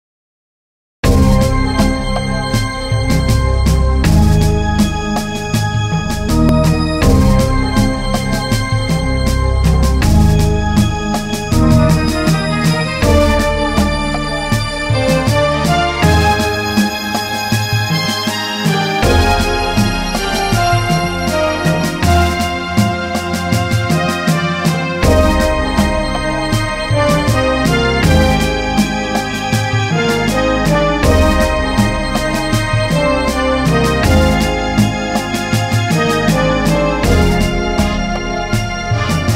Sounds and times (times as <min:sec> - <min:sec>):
Soundtrack music: 0:01.0 - 0:39.3.